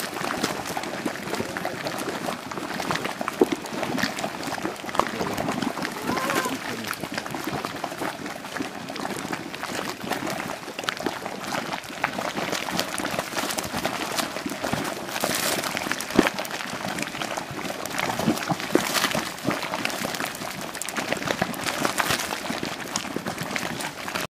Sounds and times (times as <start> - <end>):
Boiling: 0.0 - 24.3.